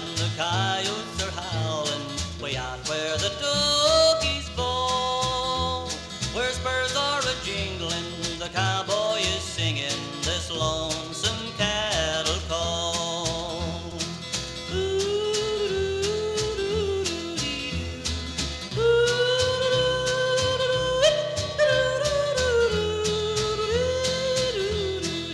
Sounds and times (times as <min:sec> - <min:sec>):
Music: 0:00.0 - 0:25.3
Singing: 0:14.7 - 0:17.9, 0:18.8 - 0:25.3.